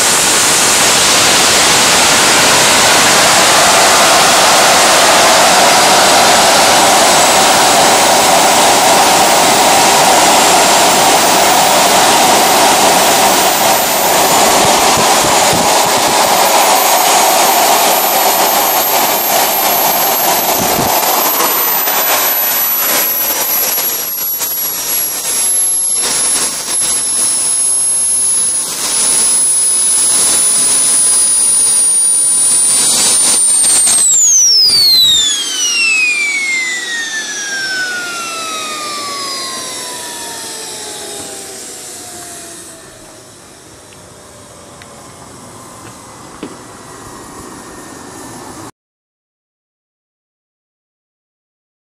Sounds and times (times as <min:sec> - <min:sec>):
Engine: 0:00.0 - 0:48.7.